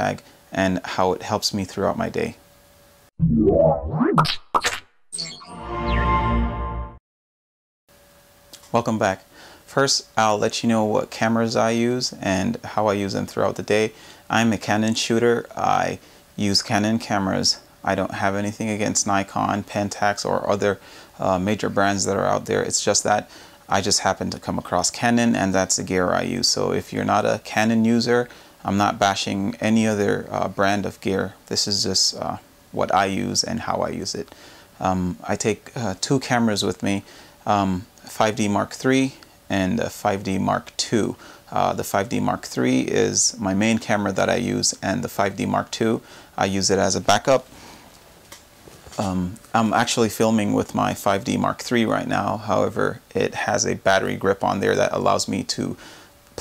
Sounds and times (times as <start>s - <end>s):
Speech: 0.0s - 2.4s, 8.6s - 47.5s, 48.9s - 55.8s.